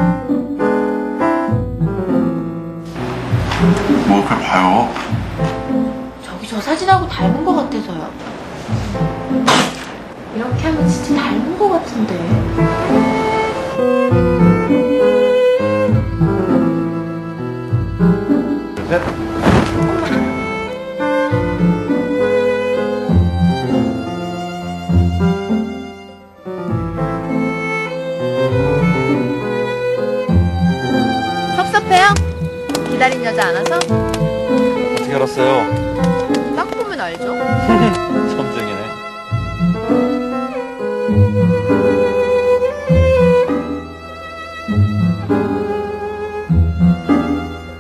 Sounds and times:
Music: 0.0 - 47.8.

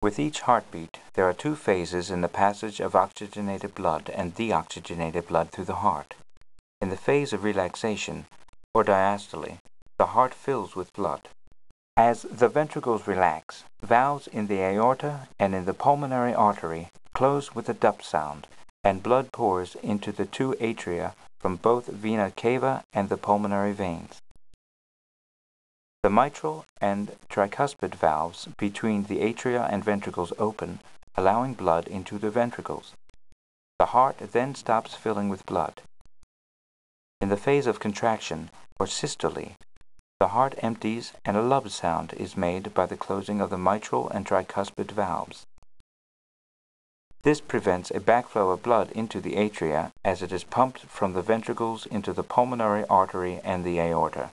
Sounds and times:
Speech: 0.0 - 6.2, 6.8 - 11.3, 12.0 - 24.2, 26.0 - 33.0, 33.8 - 35.9, 37.2 - 39.6, 40.2 - 45.5, 47.3 - 54.3.

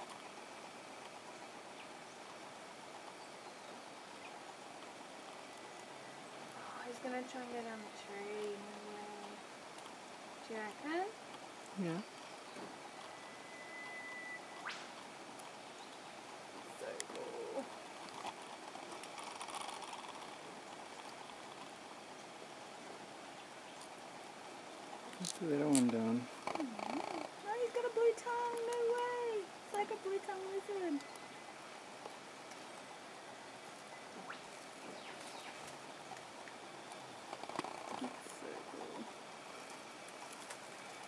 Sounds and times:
Outside, rural or natural: 0.0 - 41.0
Speech: 25.2 - 26.3, 27.4 - 31.0.

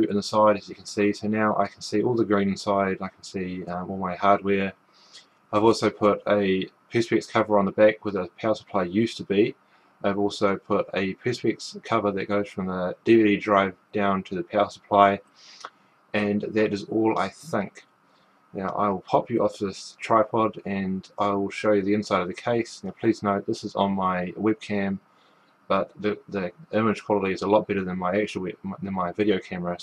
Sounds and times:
Speech: 0.0 - 4.7, 5.6 - 15.2, 16.2 - 17.8, 18.6 - 25.0, 25.7 - 29.8.

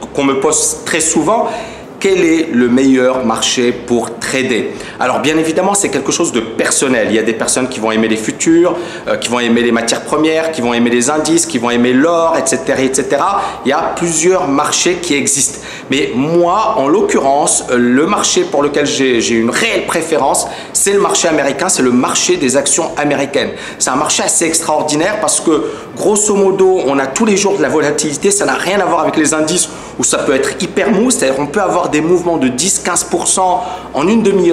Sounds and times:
Speech: 0.0 - 34.5.

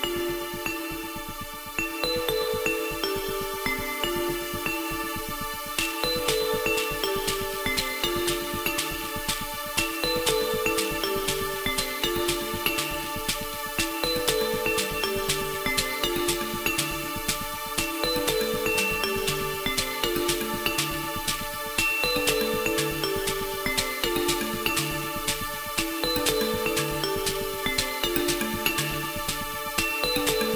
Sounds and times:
Music: 0.0 - 30.5.

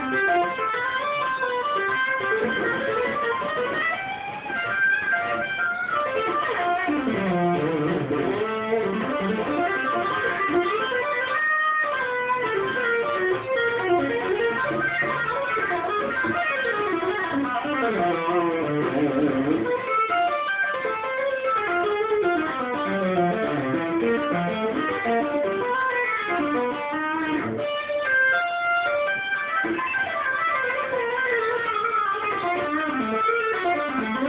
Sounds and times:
Bass guitar: 0.0 - 34.2
Strum: 0.0 - 34.2.

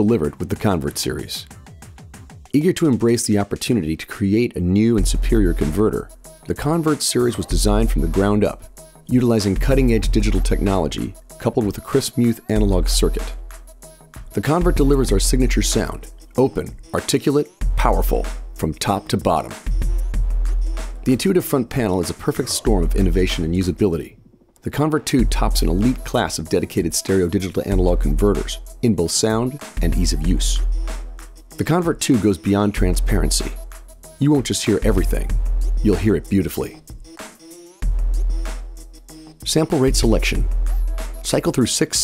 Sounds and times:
Speech: 0.0 - 1.5, 2.5 - 13.4, 14.3 - 19.6, 21.0 - 30.7, 31.6 - 33.6, 34.2 - 36.8, 39.4 - 40.5, 41.2 - 42.0
Music: 0.0 - 42.0.

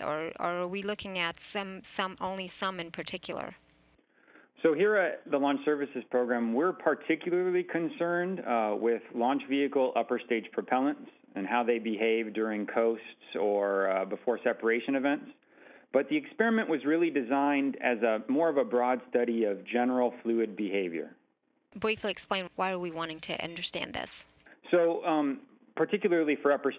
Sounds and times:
Speech: 0.0 - 3.6, 4.6 - 21.1, 21.8 - 26.7.

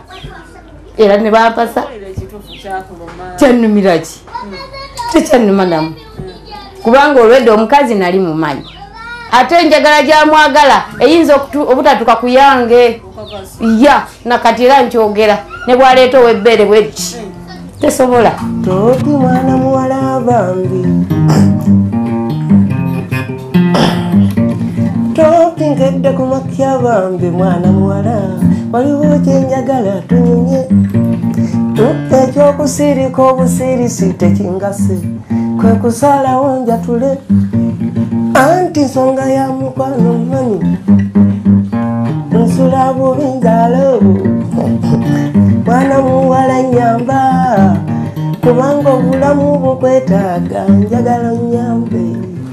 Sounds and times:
Music: 16.8 - 52.5.

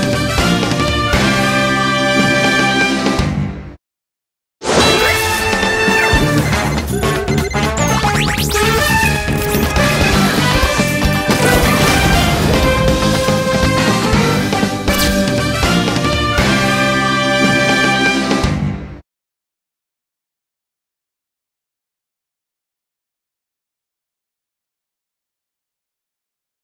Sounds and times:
Music: 0.0 - 3.8, 4.7 - 19.0.

